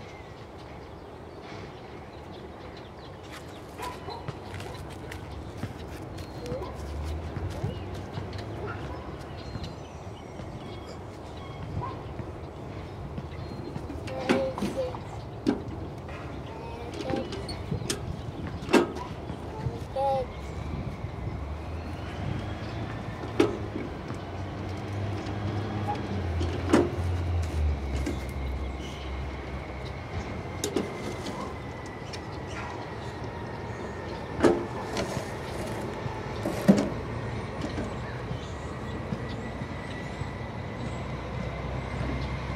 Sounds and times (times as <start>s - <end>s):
Truck: 9.6s - 42.5s.